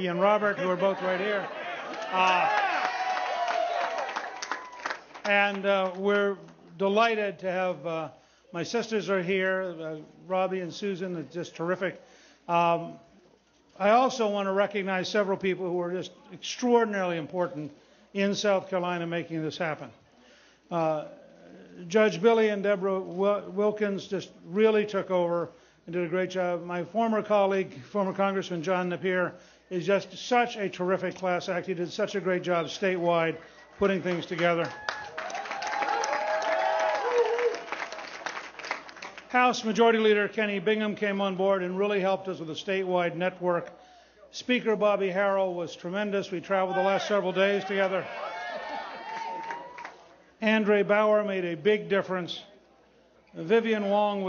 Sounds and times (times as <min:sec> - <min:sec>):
Male speech, man speaking: 0:00.0 - 0:01.5, 0:05.3 - 0:13.0, 0:13.8 - 0:20.0, 0:20.7 - 0:34.7, 0:39.4 - 0:43.7, 0:44.3 - 0:48.1, 0:50.4 - 0:52.5, 0:53.4 - 0:54.2
Narration, monologue: 0:00.0 - 0:02.5, 0:05.0 - 0:34.8, 0:38.9 - 0:48.2, 0:50.0 - 0:54.2.